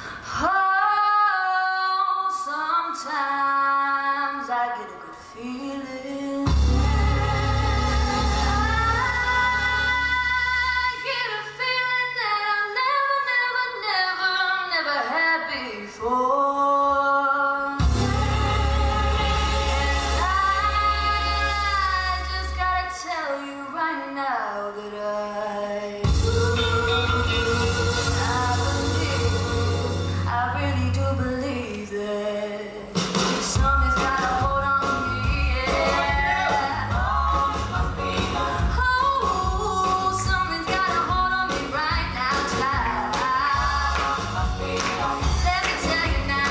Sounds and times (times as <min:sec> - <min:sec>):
Female singing: 0:00.3 - 0:46.5
Music: 0:04.1 - 0:46.5.